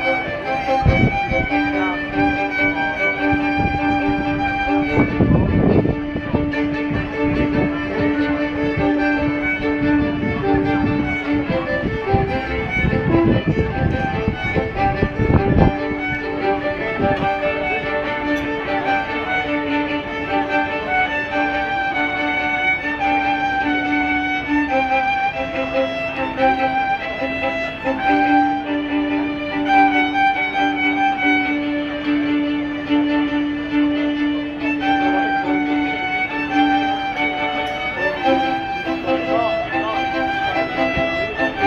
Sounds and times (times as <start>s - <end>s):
Violin, fiddle: 0.0s - 41.6s.